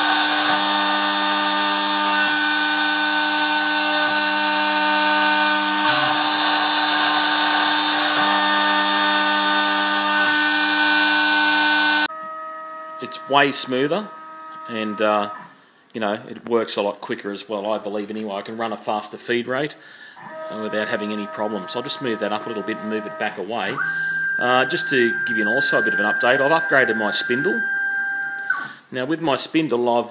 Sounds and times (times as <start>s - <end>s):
Inside, small room: 0.0s - 30.1s
Speech: 13.0s - 14.1s, 14.7s - 15.4s, 16.0s - 19.8s, 20.5s - 23.8s, 24.4s - 27.6s, 28.9s - 30.1s.